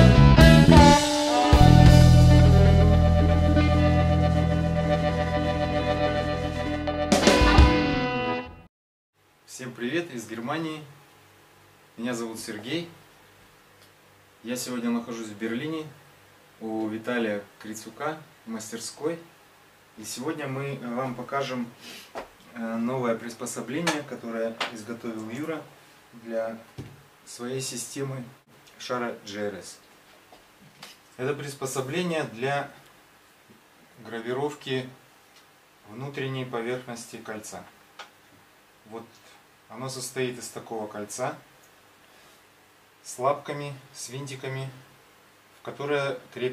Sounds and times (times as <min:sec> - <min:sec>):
Music: 0:00.0 - 0:08.7
Speech: 0:09.5 - 0:11.0, 0:12.0 - 0:13.0, 0:14.4 - 0:16.0, 0:16.6 - 0:19.3, 0:20.0 - 0:21.8, 0:22.5 - 0:26.7, 0:27.3 - 0:29.8, 0:31.2 - 0:32.8, 0:34.0 - 0:35.0, 0:35.8 - 0:37.8, 0:38.9 - 0:41.5, 0:43.0 - 0:44.8, 0:45.6 - 0:46.5.